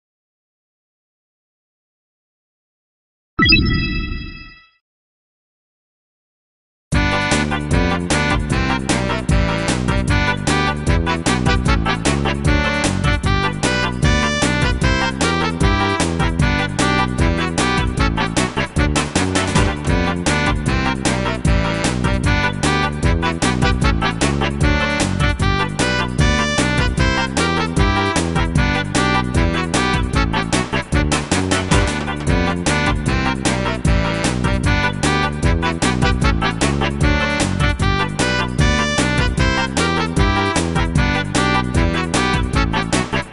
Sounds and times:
Music: 6.9s - 43.3s.

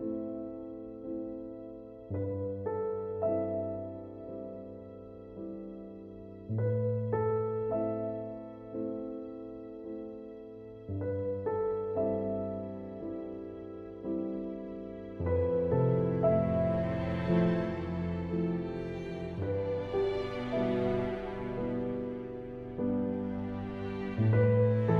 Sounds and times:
New-age music: 0.0s - 25.0s.

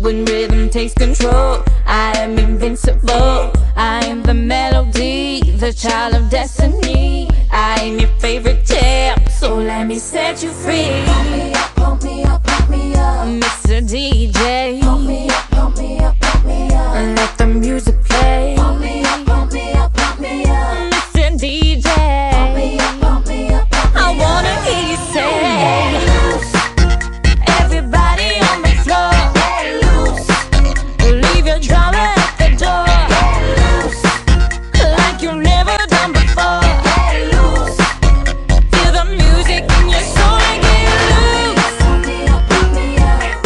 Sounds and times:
Music: 0.0s - 43.4s.

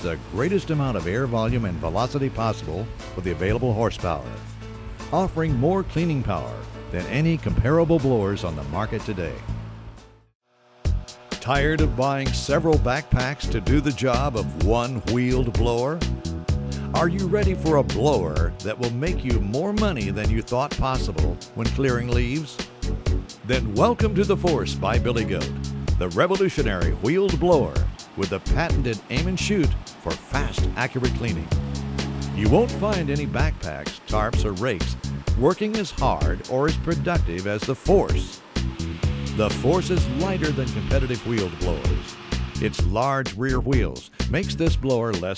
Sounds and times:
Speech: 0.0s - 4.4s, 5.1s - 9.4s, 11.4s - 16.0s, 16.9s - 22.6s, 23.4s - 31.5s, 32.4s - 38.4s, 39.4s - 45.3s
Music: 0.0s - 45.3s.

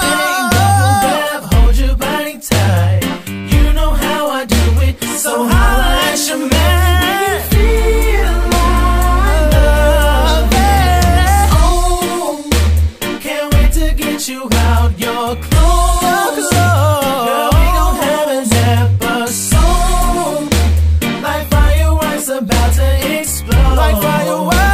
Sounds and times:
Hip hop music: 0.0s - 24.7s
Rhythm and blues: 0.0s - 24.7s.

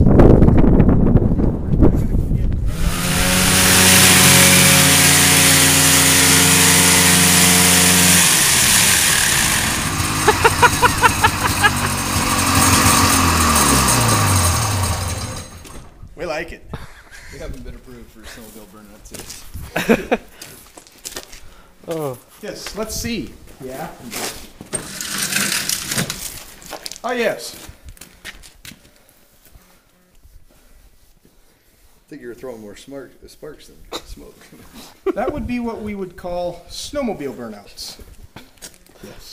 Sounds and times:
Speech: 16.2s - 16.7s, 17.4s - 19.4s, 21.9s - 24.2s, 27.0s - 27.7s, 32.1s - 38.1s, 39.0s - 39.3s.

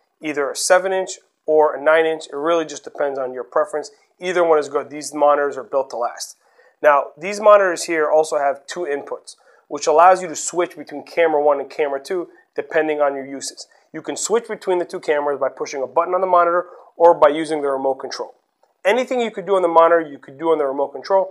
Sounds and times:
Speech: 0.2s - 21.3s.

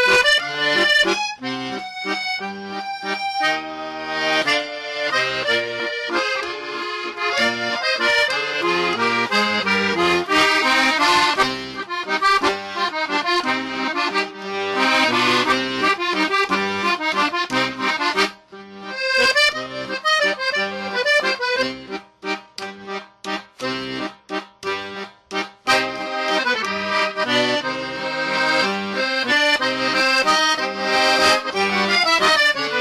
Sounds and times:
Accordion: 0.0s - 32.8s.

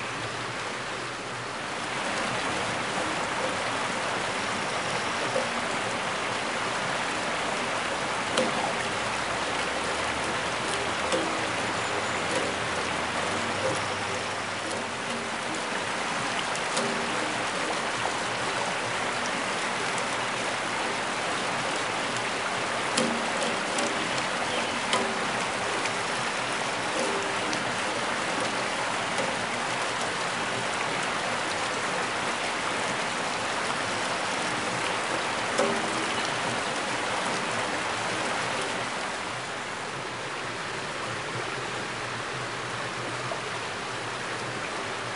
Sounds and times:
Stream: 0.0s - 45.1s.

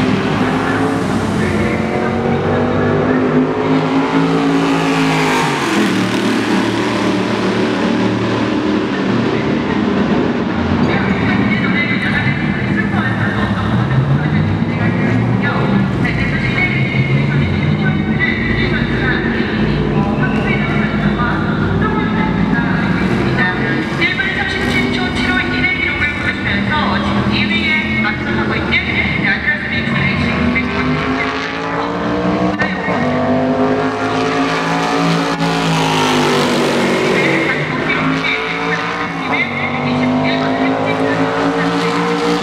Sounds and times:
Race car, auto racing: 0.0s - 42.4s
Speech: 0.4s - 3.4s, 10.8s - 32.0s, 32.6s - 33.5s, 37.1s - 42.1s.

